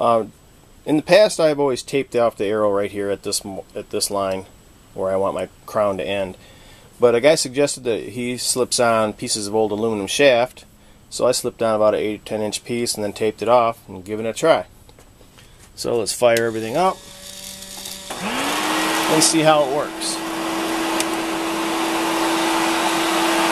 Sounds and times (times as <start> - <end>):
Speech: 0.0 - 0.3, 0.9 - 6.4, 7.0 - 14.7, 15.8 - 17.0, 19.1 - 20.2.